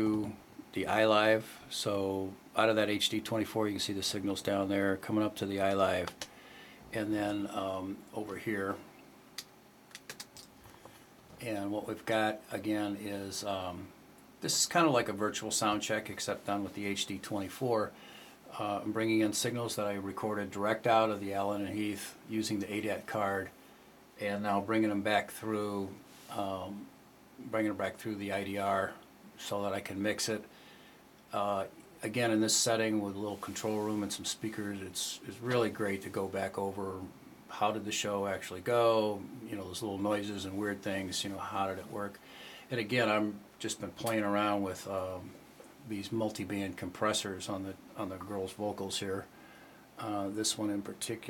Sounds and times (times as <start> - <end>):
Speech: 0.0 - 6.2, 6.9 - 8.9, 11.4 - 23.6, 24.2 - 30.5, 31.3 - 49.3, 50.0 - 51.2.